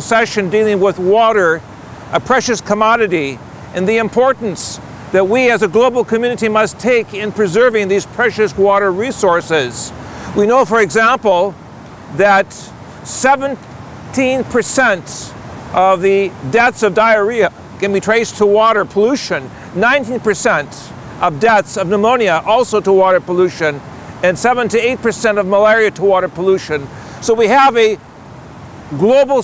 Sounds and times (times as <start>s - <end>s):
Speech: 0.0s - 1.6s, 2.2s - 11.6s, 12.2s - 13.6s, 14.2s - 28.0s, 29.0s - 29.4s
Stream: 0.0s - 29.4s.